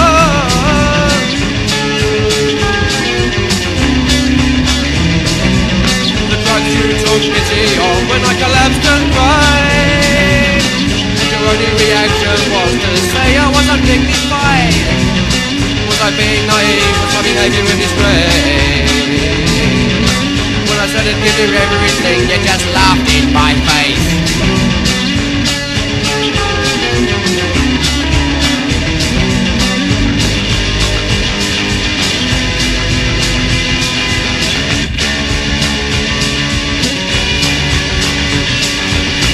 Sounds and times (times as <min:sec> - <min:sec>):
Psychedelic rock: 0:00.0 - 0:39.3
Punk rock: 0:00.0 - 0:39.3.